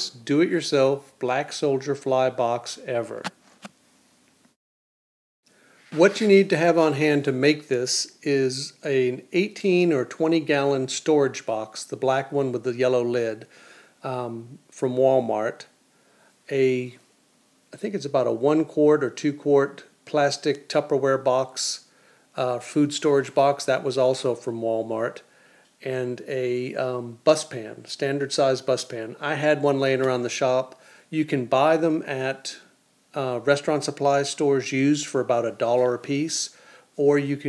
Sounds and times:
Speech: 0.0s - 3.3s, 5.9s - 15.8s, 16.5s - 17.1s, 17.8s - 37.4s.

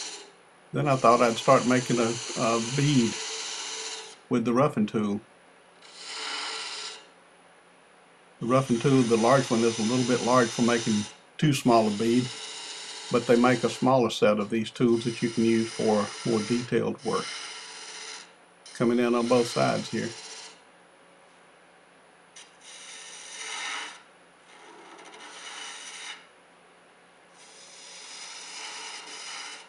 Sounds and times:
Filing (rasp): 0.0s - 4.2s, 5.8s - 7.1s, 8.4s - 14.0s, 14.8s - 20.6s, 22.4s - 26.3s, 27.4s - 29.6s.

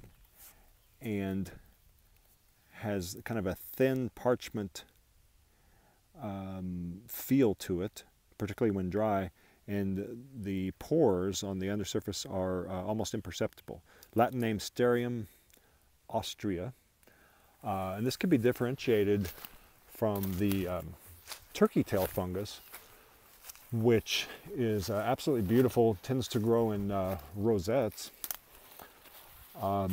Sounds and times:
Speech: 1.0s - 1.6s, 2.8s - 4.9s, 6.2s - 15.3s, 16.1s - 16.8s, 17.6s - 22.7s, 23.7s - 28.2s, 29.6s - 29.9s.

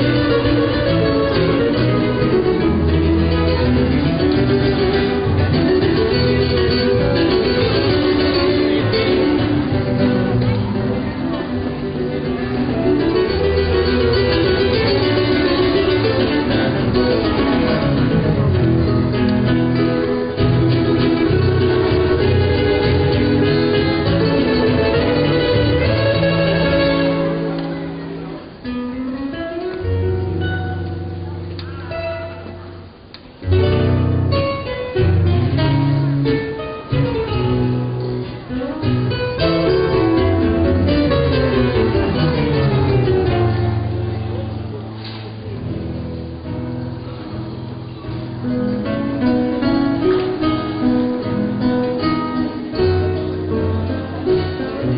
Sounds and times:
Guitar: 0.0s - 54.9s.

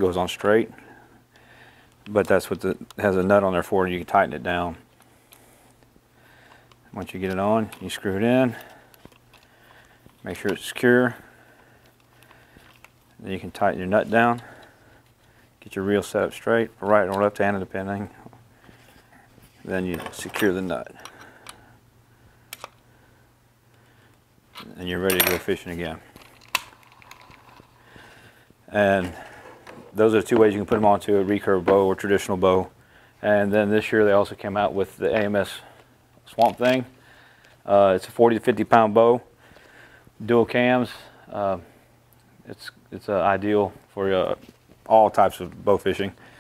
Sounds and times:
Speech: 0.0s - 0.8s, 2.1s - 4.8s, 6.9s - 8.7s, 10.2s - 11.2s, 13.2s - 14.5s, 15.6s - 18.2s, 19.6s - 21.0s, 24.6s - 26.0s, 28.7s - 29.2s, 30.0s - 35.7s, 36.3s - 36.9s, 37.7s - 39.3s, 40.2s - 41.7s, 42.4s - 46.2s.

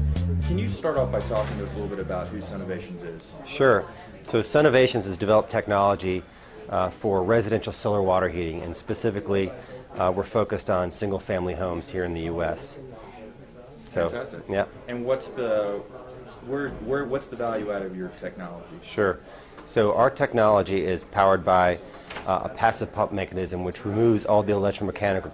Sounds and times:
Speech: 0.5s - 25.3s.

